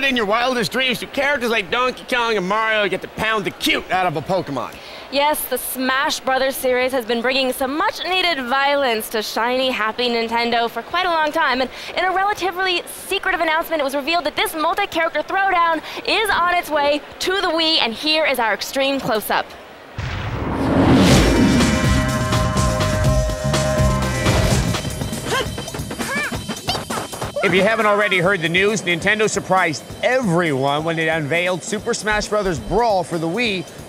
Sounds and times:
Music: 21.0 - 33.8
Speech: 27.4 - 33.6.

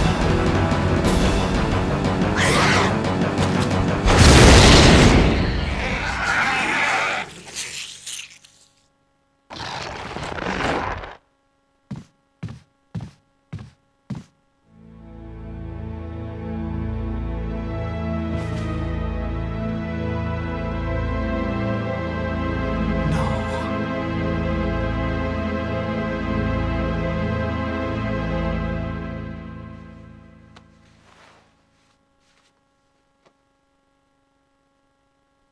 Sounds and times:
Background music: 0.0 - 6.2, 14.7 - 30.6.

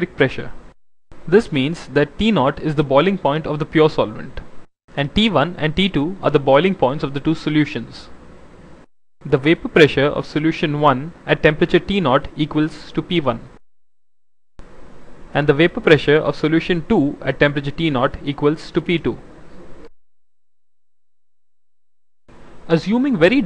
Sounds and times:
Speech: 0.0 - 0.6, 1.3 - 8.2, 9.3 - 13.6, 15.3 - 19.3, 22.7 - 23.4.

